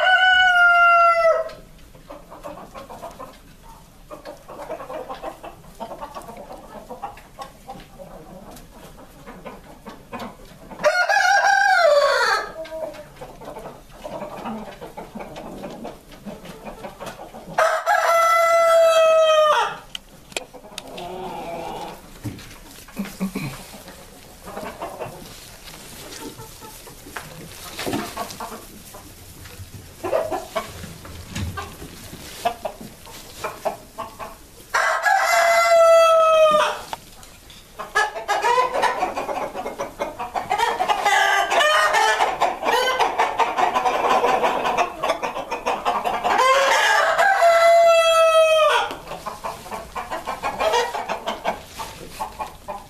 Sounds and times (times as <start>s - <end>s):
Crowing, cock-a-doodle-doo: 0.0s - 1.6s, 10.8s - 12.6s, 17.6s - 19.8s, 34.7s - 36.9s, 46.4s - 48.9s
Cluck: 0.0s - 52.8s.